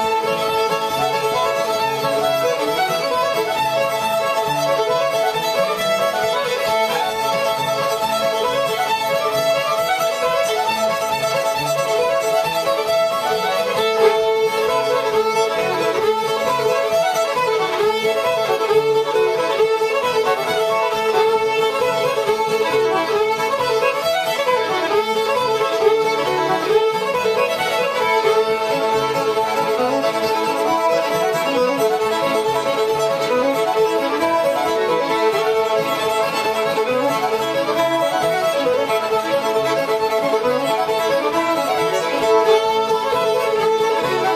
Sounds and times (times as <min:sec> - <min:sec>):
Violin, fiddle: 0:00.0 - 0:44.3.